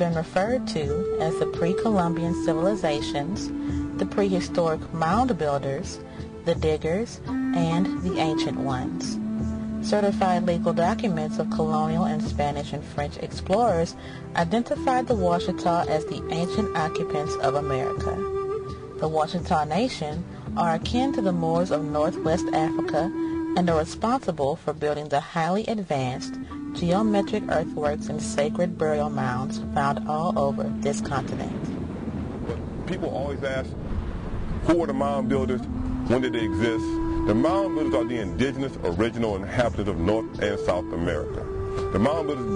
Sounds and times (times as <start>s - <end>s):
Speech: 0.0s - 3.4s, 6.5s - 9.1s, 9.9s - 18.2s, 19.0s - 31.5s, 32.5s - 33.7s, 34.7s - 42.5s
Music: 0.0s - 42.5s
Outside, rural or natural: 0.0s - 42.5s.